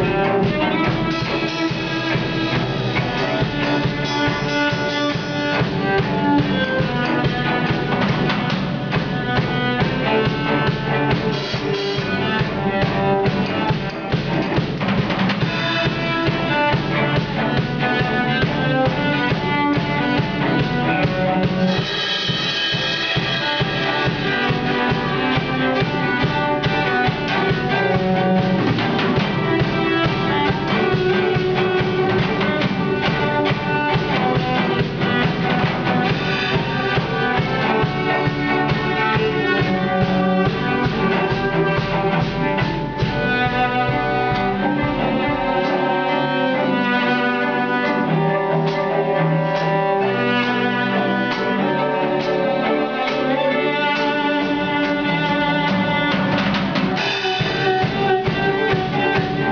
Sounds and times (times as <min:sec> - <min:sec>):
Cello: 0:00.0 - 0:59.5.